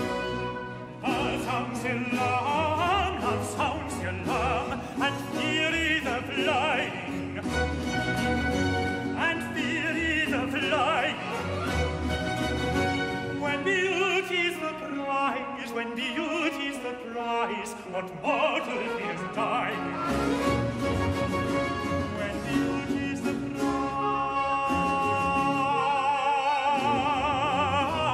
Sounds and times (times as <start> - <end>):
Music: 0.0 - 28.1.